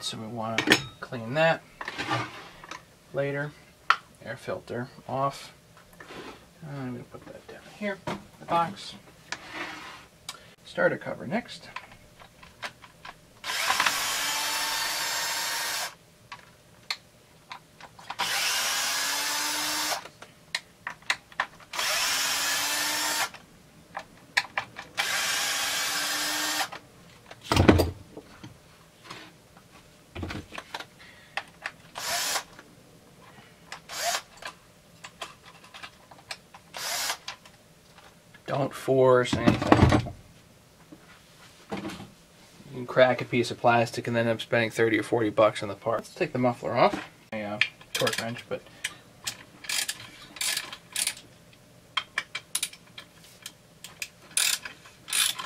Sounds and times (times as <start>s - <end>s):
Power tool: 13.4s - 16.0s, 18.2s - 20.1s, 21.7s - 23.4s, 25.0s - 26.8s, 32.0s - 32.5s, 33.9s - 34.3s, 36.8s - 37.2s.